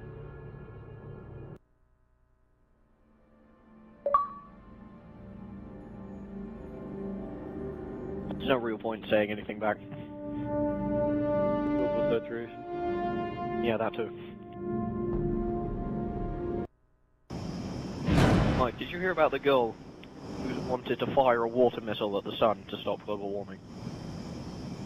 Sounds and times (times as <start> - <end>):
Music: 0.0 - 1.6, 2.9 - 16.7
Speech: 8.3 - 10.0, 11.8 - 12.6, 13.6 - 14.3, 18.5 - 19.8, 20.4 - 23.6.